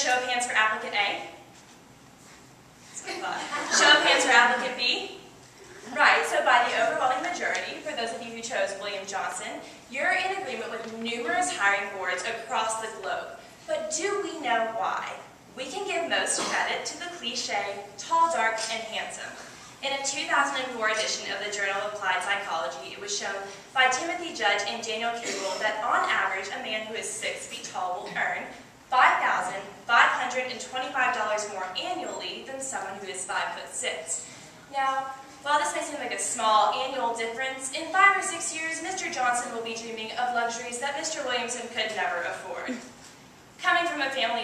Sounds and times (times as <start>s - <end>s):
Female speech, woman speaking: 0.0s - 1.4s, 3.0s - 5.2s, 5.9s - 42.8s, 43.6s - 44.4s
Narration, monologue: 0.0s - 44.4s.